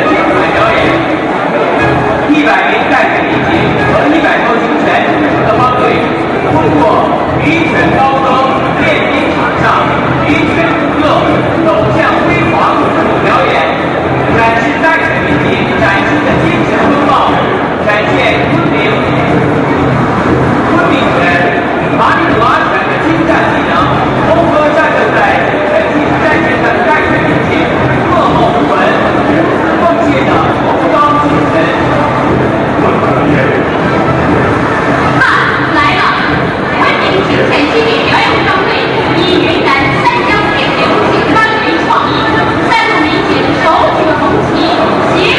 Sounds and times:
Speech: 0.0s - 19.9s, 20.6s - 34.1s, 35.1s - 45.3s.

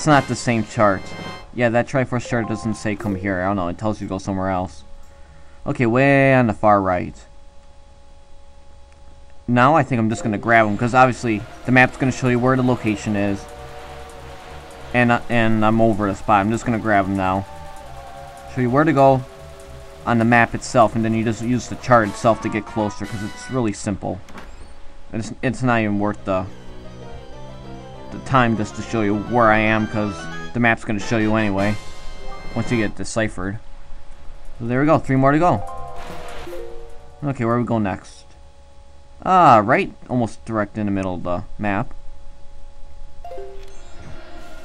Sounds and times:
Speech: 0.0s - 4.9s, 5.7s - 7.4s, 9.5s - 13.5s, 15.0s - 17.5s, 18.5s - 19.3s, 20.0s - 24.2s, 25.1s - 26.5s, 28.2s - 31.8s, 32.6s - 33.6s, 34.6s - 35.6s, 37.2s - 38.4s, 39.2s - 42.0s.

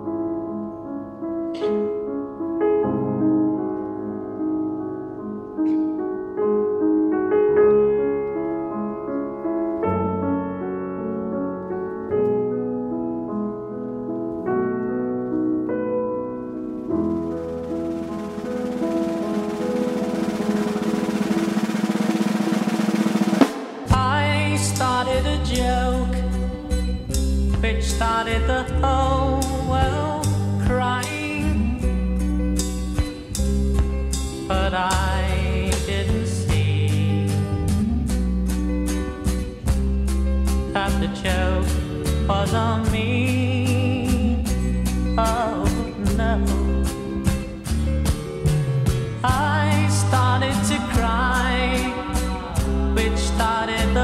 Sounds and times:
Drum roll: 16.7s - 25.6s, 47.3s - 54.0s
Rimshot: 16.8s - 24.9s.

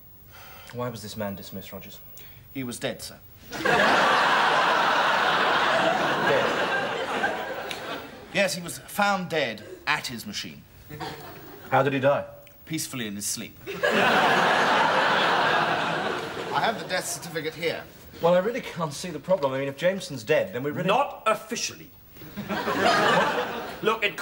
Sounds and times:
Speech: 0.7s - 3.2s, 8.3s - 10.6s, 11.7s - 13.6s, 16.5s - 21.9s, 23.8s - 24.2s.

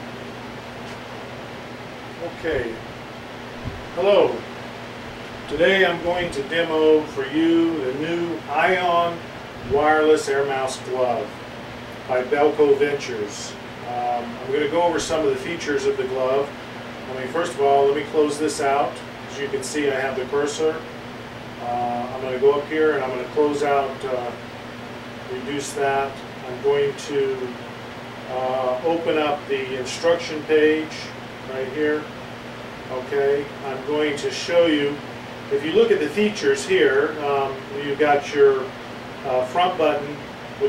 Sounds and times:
Speech: 2.2s - 2.9s, 4.0s - 4.5s, 5.5s - 11.4s, 12.1s - 20.9s, 21.6s - 24.4s, 25.3s - 27.6s, 28.3s - 32.1s, 32.9s - 40.6s.

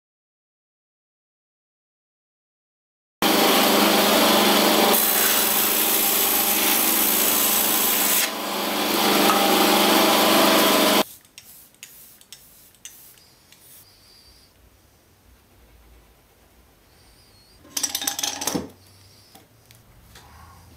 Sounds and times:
Power tool: 3.2s - 11.1s.

